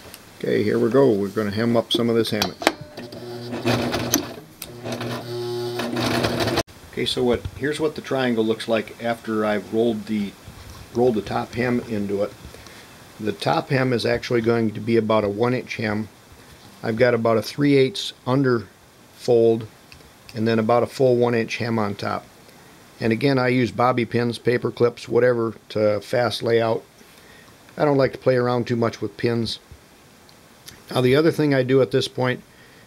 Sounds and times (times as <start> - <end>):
Speech: 0.4 - 2.6, 6.9 - 10.4, 11.0 - 12.4, 13.2 - 16.1, 16.8 - 19.7, 20.3 - 22.3, 23.0 - 26.9, 27.8 - 29.7, 30.8 - 32.4.